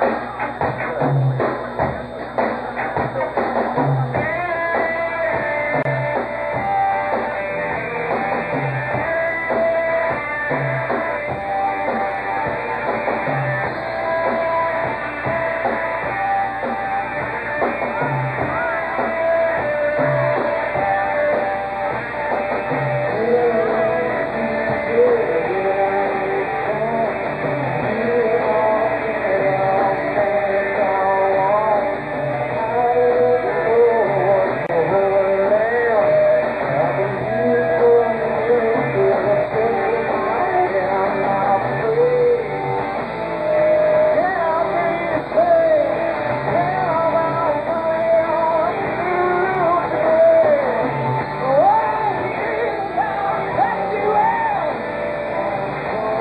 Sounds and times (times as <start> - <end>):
Music: 0.0 - 56.2.